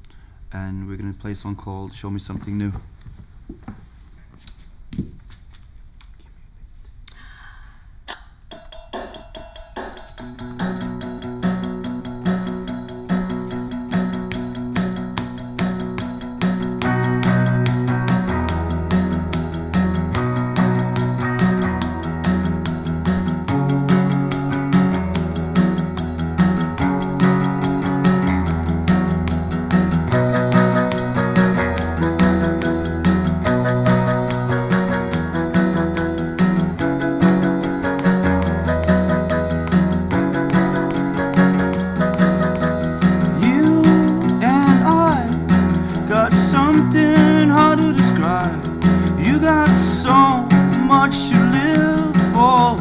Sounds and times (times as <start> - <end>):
Music: 8.5 - 52.8.